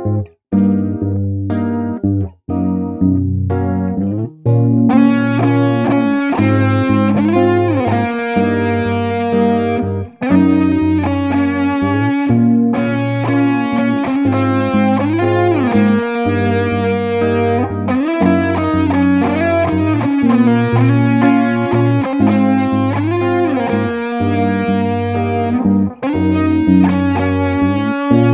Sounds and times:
Effects unit: 0:00.0 - 0:28.3
Guitar: 0:00.0 - 0:28.3.

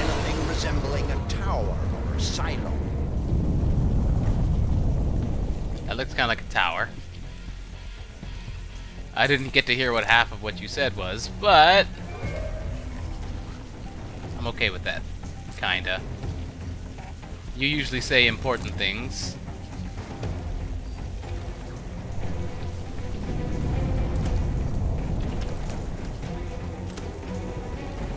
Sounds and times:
Speech: 0:00.0 - 0:02.8, 0:05.8 - 0:07.0, 0:09.2 - 0:11.9, 0:14.4 - 0:15.0, 0:15.6 - 0:16.0, 0:17.6 - 0:19.4
Music: 0:00.0 - 0:28.1.

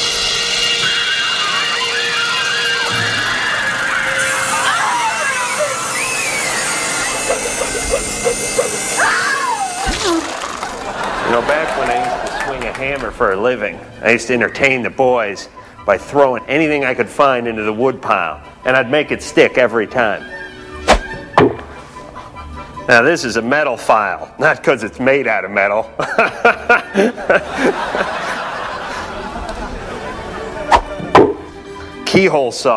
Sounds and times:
Inside, large room or hall: 0:00.0 - 0:15.5, 0:20.1 - 0:22.4, 0:26.8 - 0:32.2.

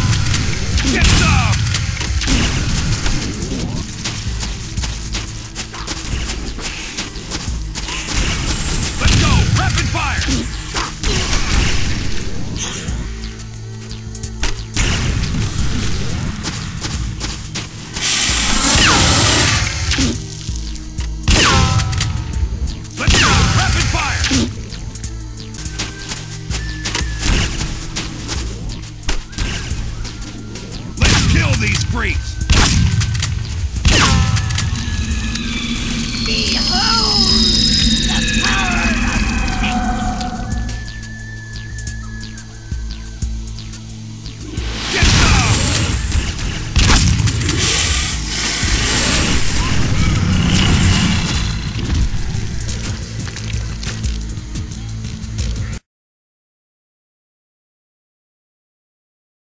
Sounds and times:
Music: 0:00.0 - 0:55.9
Speech: 0:00.8 - 0:01.6, 0:09.0 - 0:10.3, 0:23.0 - 0:24.4, 0:31.0 - 0:32.4.

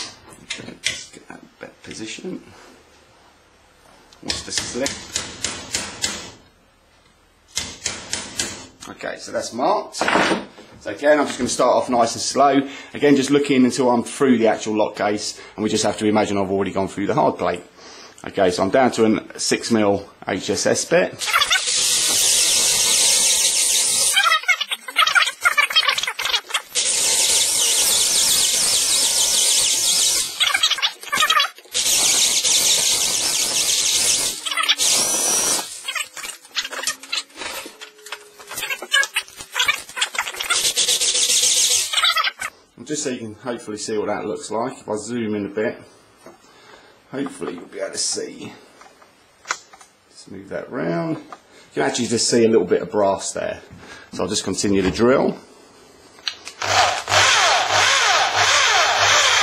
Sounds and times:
Drill: 0:21.2 - 0:24.2, 0:26.6 - 0:30.8, 0:31.7 - 0:35.9, 0:40.6 - 0:41.9, 0:56.6 - 0:59.4.

